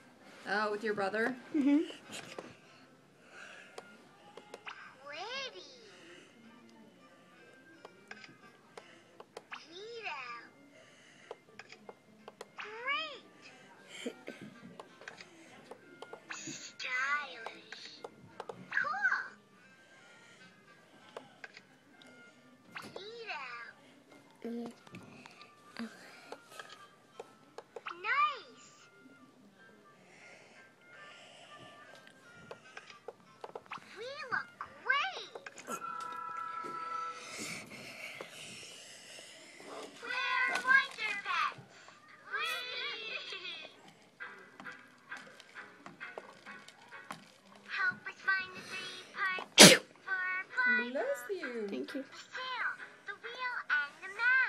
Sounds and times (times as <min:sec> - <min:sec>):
Music: 0:00.0 - 0:54.4.